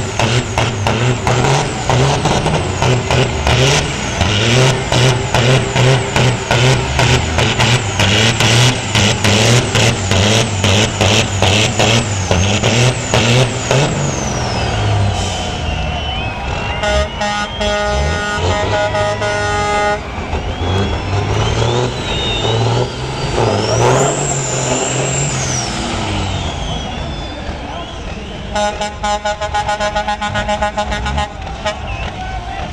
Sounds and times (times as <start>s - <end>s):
Truck: 0.0s - 32.7s
Speech: 26.9s - 28.6s, 31.3s - 32.7s.